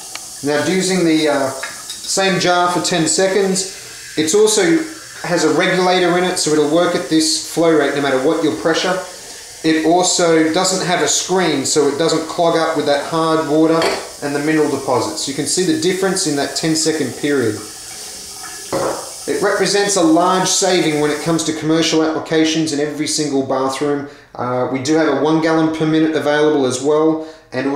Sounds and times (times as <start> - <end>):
Water: 0.0 - 21.8
Water tap, faucet: 0.0 - 23.5
Sink (filling or washing): 0.0 - 27.7.